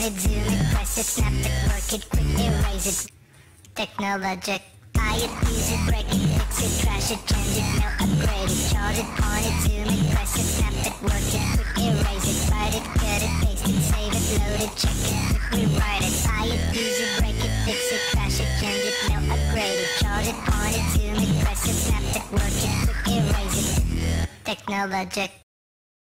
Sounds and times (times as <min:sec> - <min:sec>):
Music: 0:00.0 - 0:03.1, 0:05.0 - 0:24.5.